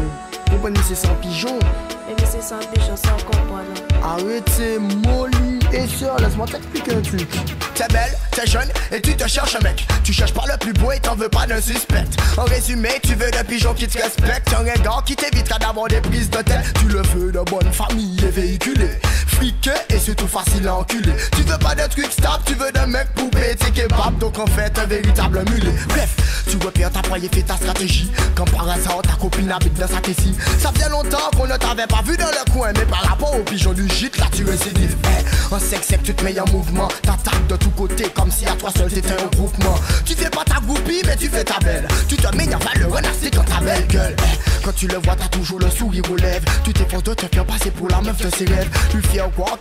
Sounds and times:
Music: 0.0s - 49.6s.

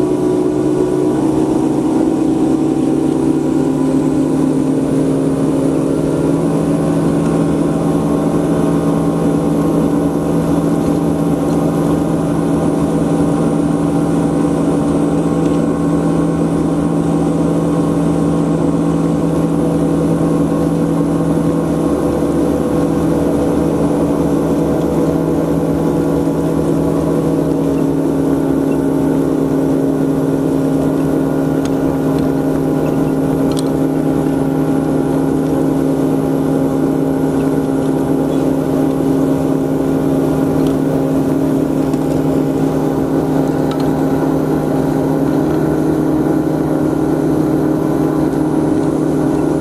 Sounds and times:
Motorboat, speedboat: 0.0s - 49.6s.

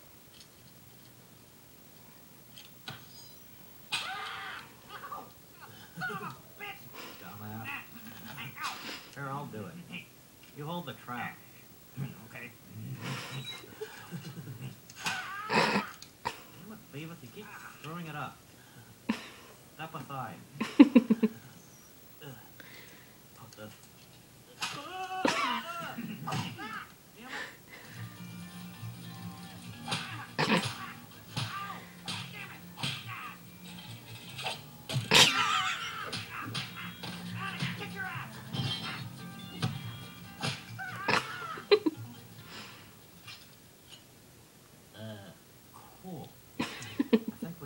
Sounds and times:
Music: 27.8s - 42.9s.

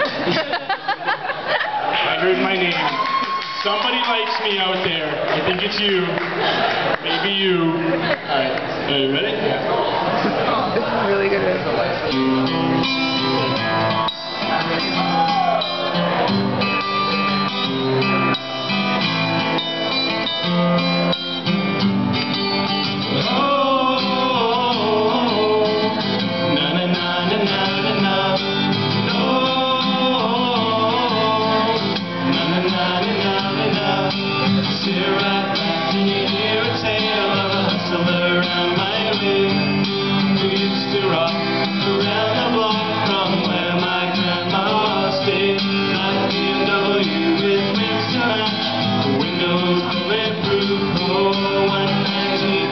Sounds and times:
Music: 11.2s - 52.7s.

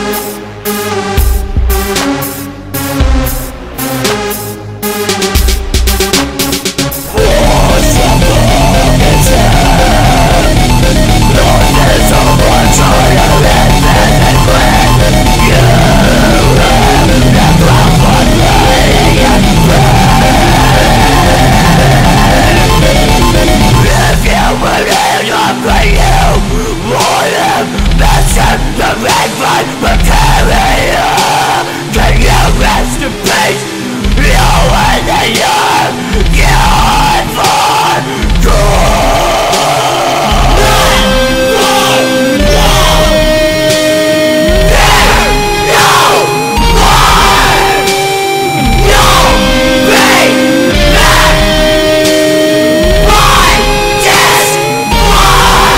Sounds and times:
Music: 0.0s - 55.7s.

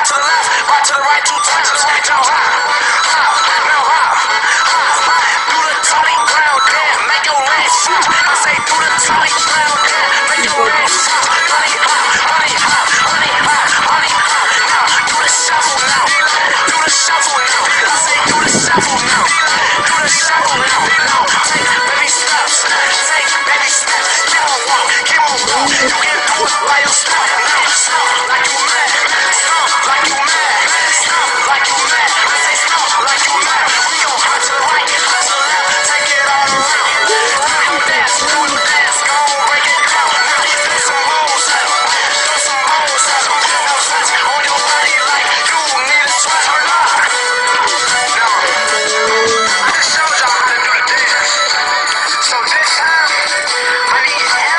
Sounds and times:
Music: 0.0s - 54.5s.

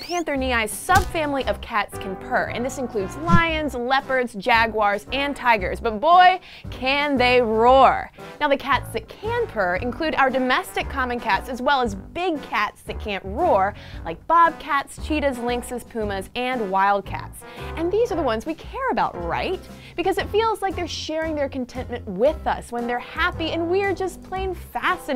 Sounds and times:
Speech: 0.0s - 25.1s.

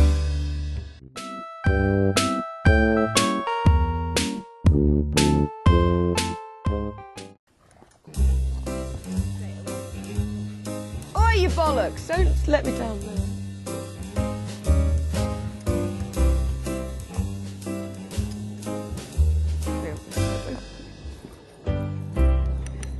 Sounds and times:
Music: 0.0s - 7.4s, 8.1s - 22.9s
Speech: 11.2s - 13.2s, 19.8s - 20.7s.

